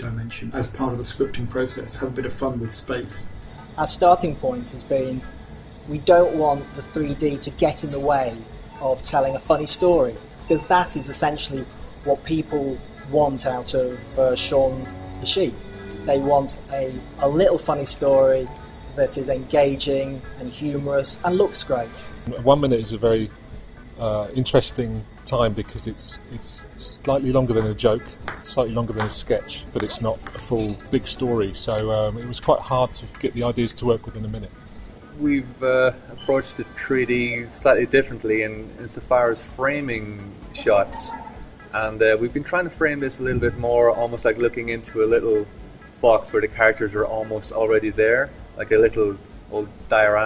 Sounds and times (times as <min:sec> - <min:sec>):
Speech: 0:00.0 - 0:05.3, 0:05.9 - 0:23.3, 0:24.0 - 0:34.5, 0:35.2 - 0:50.2
Music: 0:00.0 - 0:50.2.